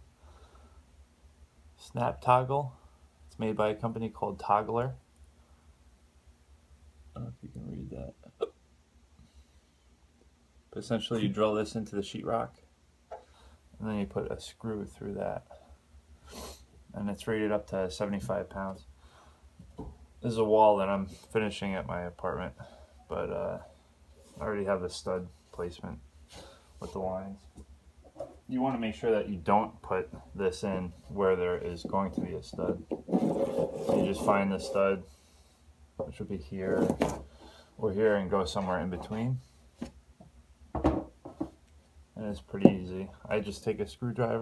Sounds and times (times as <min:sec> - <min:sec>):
Speech: 0:01.8 - 0:05.0, 0:07.2 - 0:08.3, 0:10.7 - 0:12.6, 0:13.8 - 0:15.6, 0:16.9 - 0:18.9, 0:20.2 - 0:23.7, 0:24.4 - 0:26.0, 0:26.8 - 0:27.5, 0:28.5 - 0:32.9, 0:33.9 - 0:35.1, 0:36.0 - 0:37.0, 0:37.8 - 0:39.4, 0:42.2 - 0:44.4.